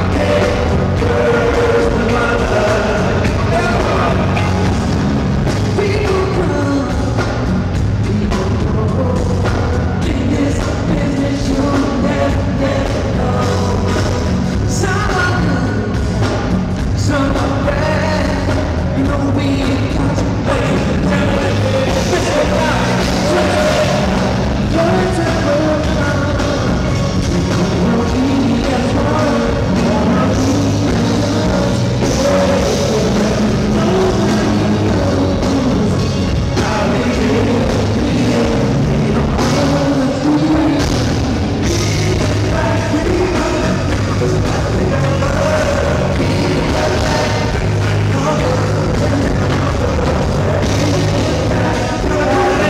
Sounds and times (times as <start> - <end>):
Music: 0.0 - 52.7.